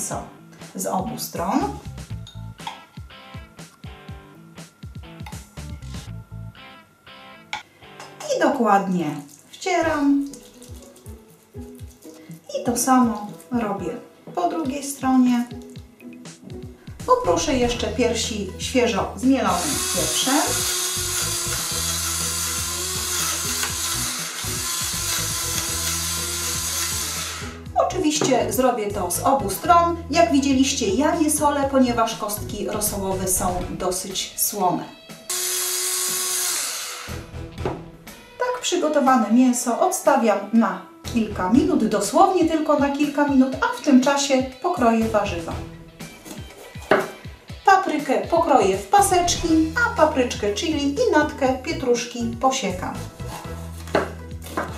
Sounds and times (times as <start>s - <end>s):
Speech: 0.0s - 1.8s, 8.2s - 10.3s, 12.5s - 15.6s, 17.0s - 20.6s, 27.8s - 35.0s, 38.4s - 45.7s, 47.7s - 53.1s
Music: 0.0s - 54.7s.